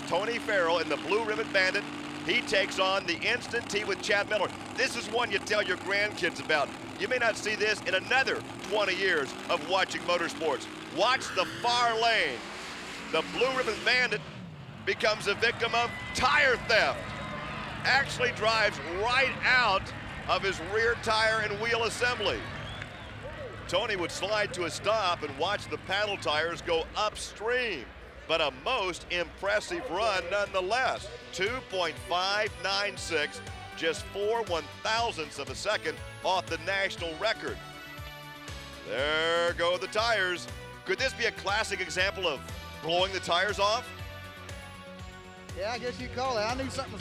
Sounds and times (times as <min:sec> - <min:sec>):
Speech: 0:00.0 - 0:12.4, 0:13.2 - 0:14.2, 0:14.9 - 0:17.0, 0:17.9 - 0:22.4, 0:23.7 - 0:37.6, 0:38.9 - 0:43.9, 0:45.6 - 0:47.0
Music: 0:15.3 - 0:26.8, 0:29.6 - 0:47.0.